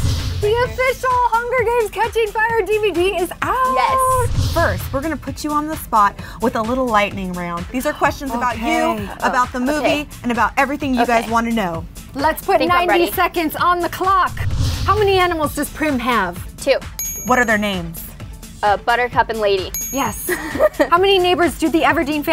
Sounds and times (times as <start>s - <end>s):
Music: 0.0s - 22.3s
Speech: 0.4s - 14.3s.